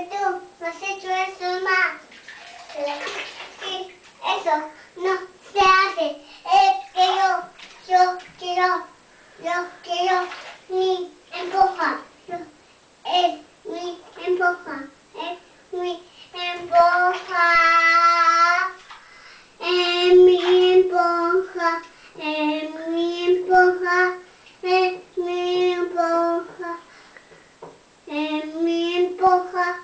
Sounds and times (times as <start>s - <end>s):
Child singing: 0.0s - 2.0s, 2.8s - 18.8s, 19.6s - 26.9s, 28.1s - 29.8s
Bathtub (filling or washing): 0.0s - 27.2s.